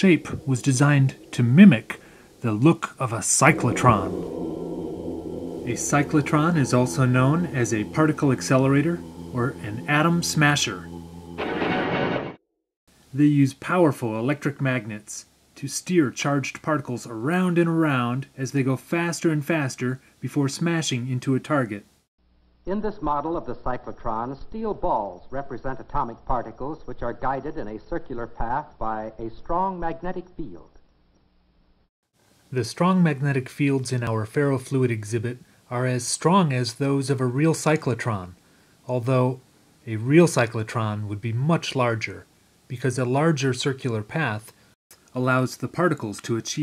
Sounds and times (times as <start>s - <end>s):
Speech: 0.0s - 4.4s, 5.6s - 10.9s, 13.1s - 21.8s, 22.7s - 30.7s, 32.5s - 46.6s.